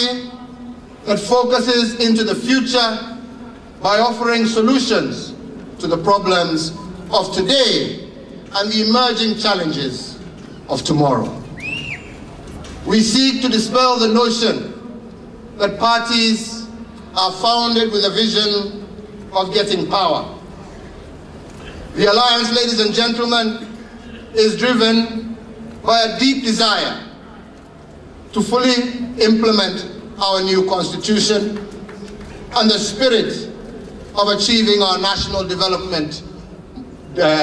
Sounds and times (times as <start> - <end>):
Male speech, man speaking: 0.0 - 0.5, 1.1 - 3.2, 3.8 - 11.4, 12.9 - 14.8, 15.6 - 20.4, 22.0 - 23.8, 24.4 - 27.1, 28.4 - 31.7, 32.6 - 33.6, 34.2 - 36.3, 37.2 - 37.4
Narration, monologue: 0.0 - 11.7, 12.3 - 37.4.